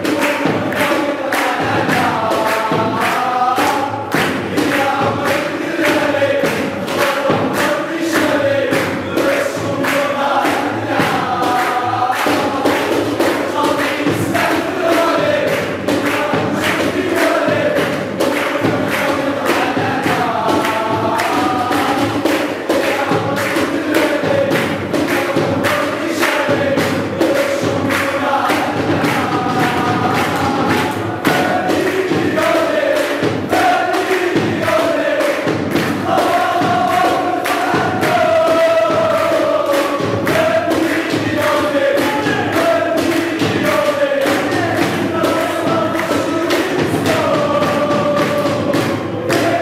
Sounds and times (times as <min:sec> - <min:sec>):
Mantra: 0:00.0 - 0:49.6.